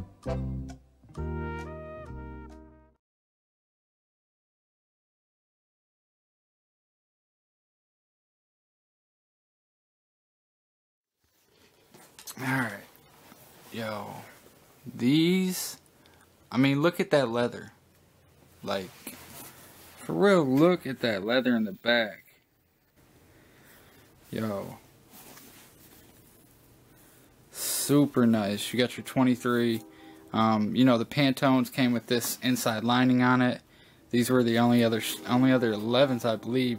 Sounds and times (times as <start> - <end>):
Music: 0.0 - 3.0, 28.3 - 31.4, 34.2 - 36.7
Inside, small room: 11.1 - 36.7.